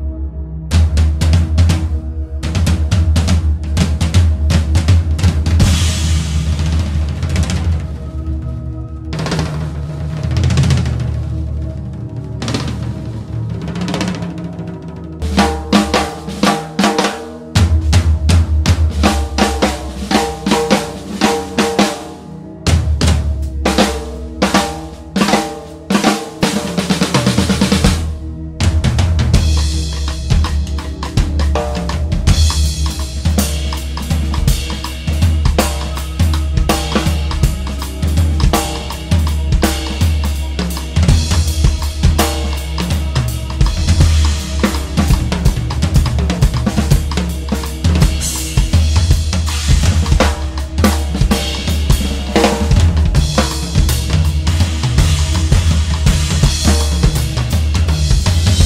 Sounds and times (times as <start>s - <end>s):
Bass drum: 0.8s - 8.2s, 15.2s - 21.9s, 22.7s - 58.6s.